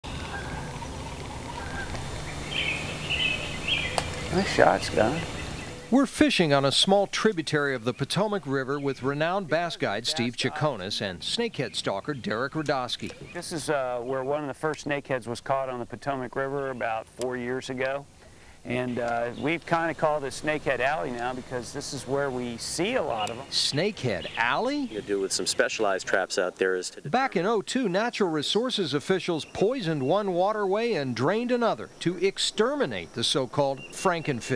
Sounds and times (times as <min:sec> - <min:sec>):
Outside, rural or natural: 0:00.0 - 0:34.5
Speech: 0:04.3 - 0:05.3, 0:05.9 - 0:18.0, 0:18.6 - 0:34.5.